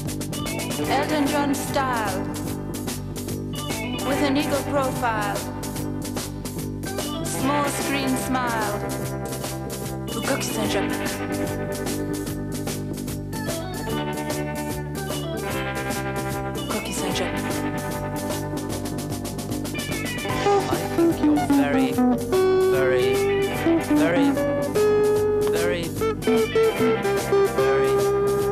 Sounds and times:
Music: 0.0s - 28.5s
Speech: 0.8s - 2.3s, 4.0s - 5.5s, 7.3s - 8.9s, 10.1s - 11.0s, 16.7s - 17.5s, 20.6s - 22.0s, 22.7s - 23.2s, 23.9s - 24.4s, 25.5s - 26.0s.

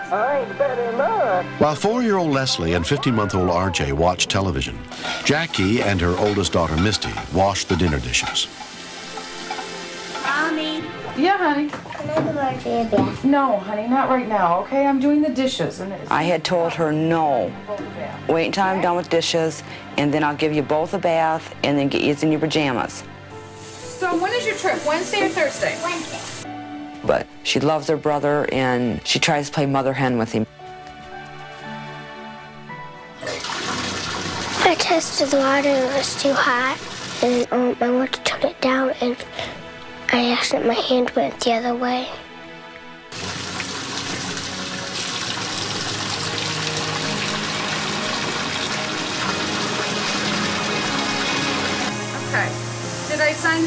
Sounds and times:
Water tap, faucet: 4.8s - 13.2s, 23.4s - 26.5s, 33.2s - 37.5s, 43.1s - 53.6s
Sizzle: 4.8s - 13.5s, 23.3s - 26.5s, 33.2s - 37.5s, 43.1s - 53.6s
Water: 4.8s - 13.5s, 33.2s - 37.5s, 43.1s - 53.6s.

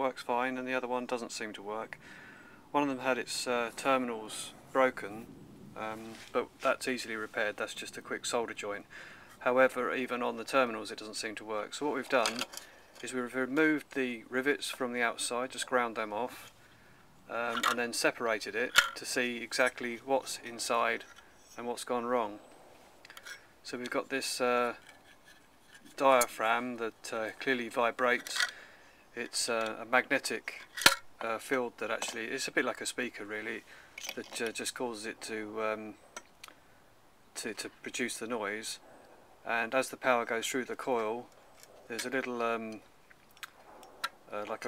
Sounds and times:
Speech: 0.0s - 2.0s, 2.7s - 16.5s, 17.3s - 21.0s, 21.6s - 22.4s, 23.6s - 24.8s, 25.9s - 28.4s, 29.2s - 30.6s, 31.2s - 33.6s, 34.2s - 36.0s, 37.4s - 38.8s, 39.5s - 41.3s, 41.9s - 42.8s, 44.3s - 44.6s.

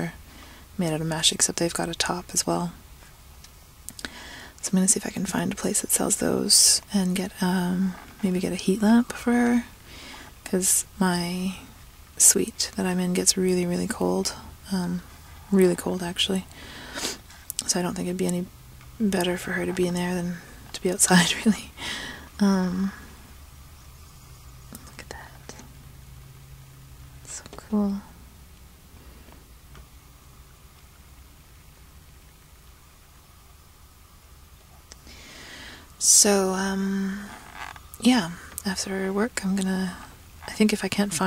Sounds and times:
Speech: 0.0s - 0.2s, 0.8s - 2.8s, 4.6s - 9.7s, 10.4s - 16.5s, 17.6s - 21.8s, 22.4s - 23.0s, 27.3s - 28.1s, 36.0s - 37.4s, 38.0s - 41.2s.

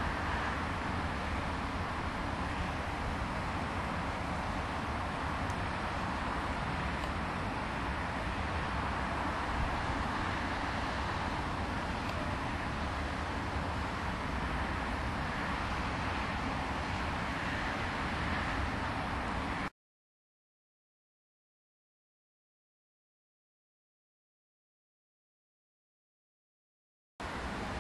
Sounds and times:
Vehicle: 0.0s - 19.7s, 27.2s - 27.8s.

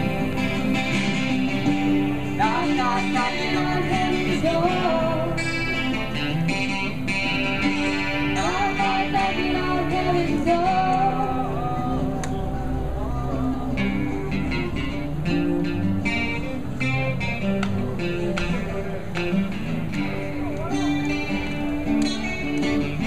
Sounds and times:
Music: 0.0s - 23.0s.

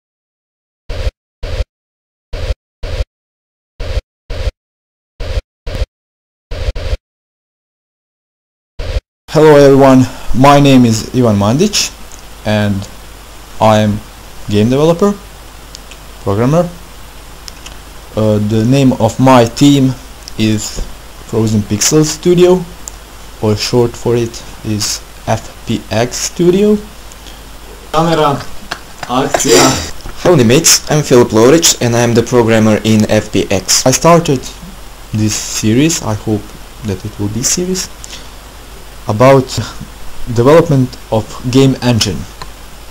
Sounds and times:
Speech: 9.3s - 12.9s, 13.6s - 15.2s, 16.2s - 16.8s, 18.2s - 22.7s, 23.4s - 26.9s, 28.0s - 37.9s, 39.1s - 42.3s.

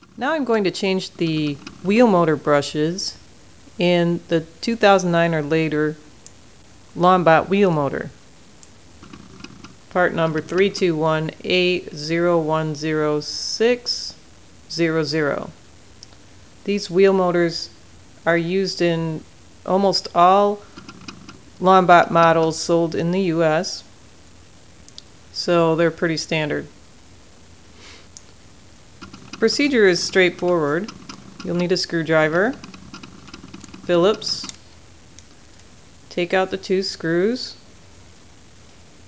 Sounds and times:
Speech: 0.2s - 3.2s, 3.8s - 6.1s, 7.0s - 8.2s, 10.0s - 15.6s, 16.6s - 20.6s, 21.6s - 23.9s, 25.3s - 26.8s, 29.4s - 30.9s, 31.5s - 32.6s, 33.9s - 34.6s, 36.1s - 37.7s.

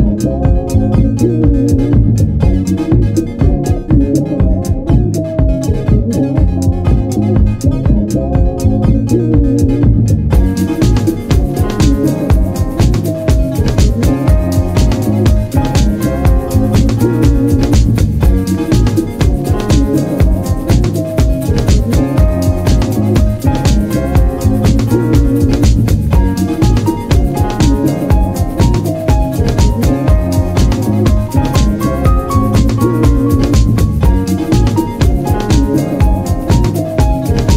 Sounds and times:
Music: 0.0s - 37.5s.

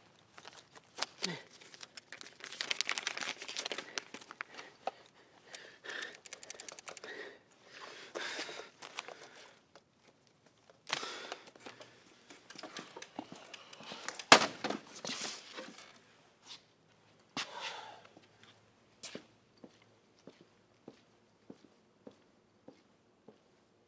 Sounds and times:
Crumpling, crinkling: 0.0s - 5.1s, 8.8s - 9.5s.

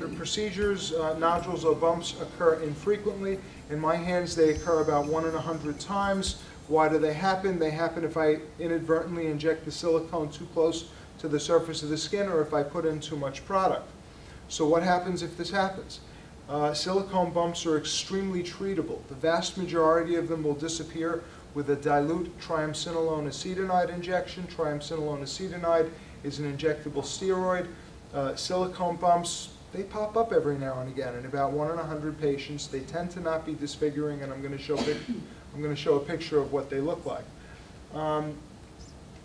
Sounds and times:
Speech: 0.0s - 13.9s, 14.5s - 37.3s, 37.9s - 38.5s.

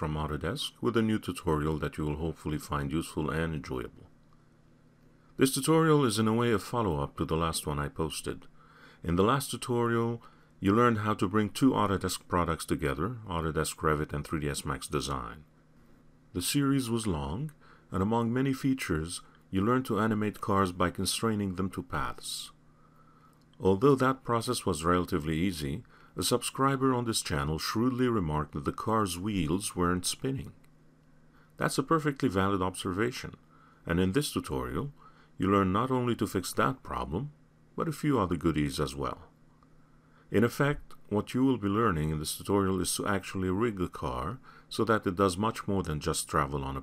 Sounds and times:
Speech: 0.0s - 4.1s, 5.4s - 15.5s, 16.3s - 22.6s, 23.6s - 30.6s, 31.6s - 39.4s, 40.3s - 46.8s.

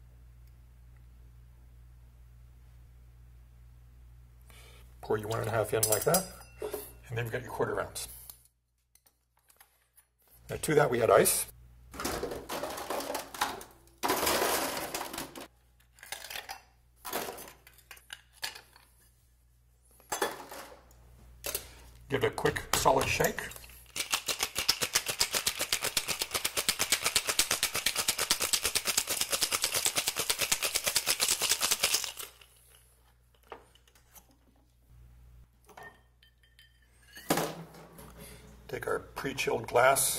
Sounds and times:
Speech: 5.0s - 6.4s, 7.0s - 8.2s, 10.5s - 11.5s, 22.1s - 23.6s, 38.7s - 40.1s.

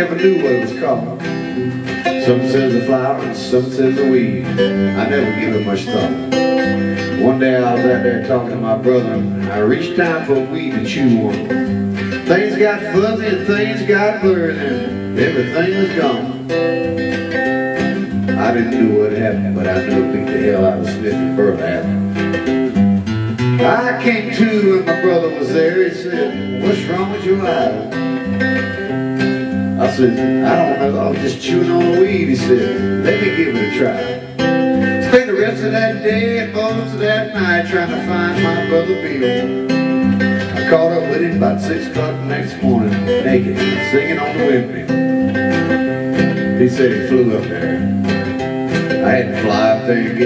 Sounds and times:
Speech: 0.0s - 1.2s, 2.2s - 6.3s, 7.2s - 11.5s, 12.2s - 16.4s, 18.4s - 22.0s, 23.6s - 28.0s, 29.8s - 34.2s, 35.0s - 39.5s, 40.6s - 45.0s, 46.6s - 47.9s, 49.0s - 50.2s
Music: 0.0s - 50.2s.

